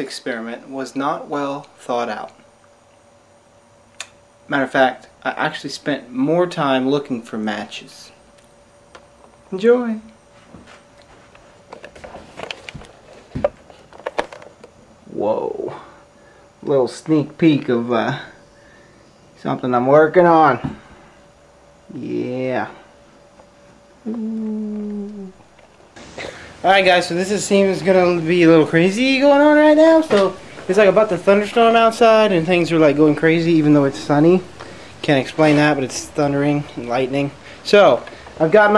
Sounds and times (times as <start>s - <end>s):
Speech: 0.0s - 2.4s, 4.5s - 8.2s, 9.5s - 10.2s, 15.1s - 15.9s, 16.6s - 18.4s, 19.4s - 20.7s, 21.9s - 22.8s, 26.6s - 38.7s.